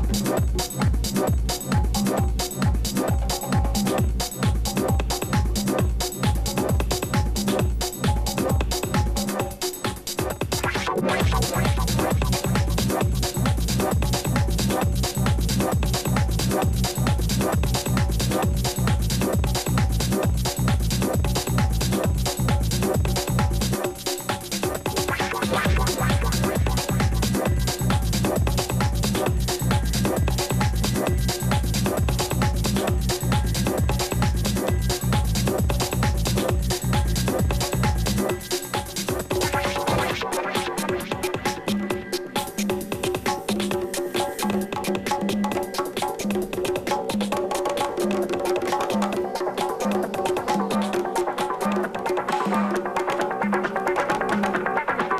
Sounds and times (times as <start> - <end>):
Percussion: 0.0 - 55.1.